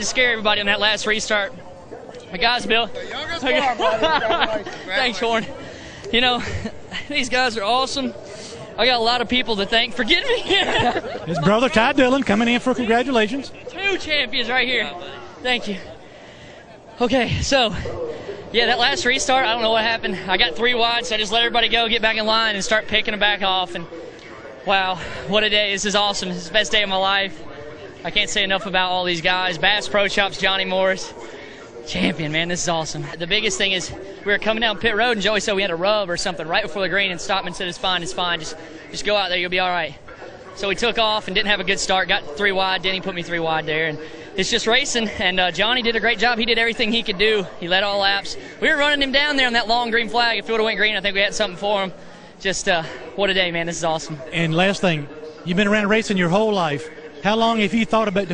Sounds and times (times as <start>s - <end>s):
Speech: 2.3s - 16.0s, 16.8s - 58.3s.